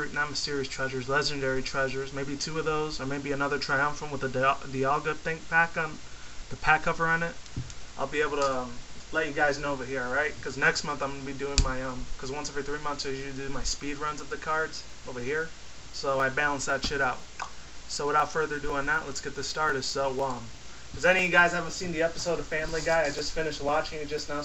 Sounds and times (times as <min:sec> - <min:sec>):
Speech: 0:00.0 - 0:07.4, 0:08.0 - 0:17.3, 0:17.9 - 0:24.4.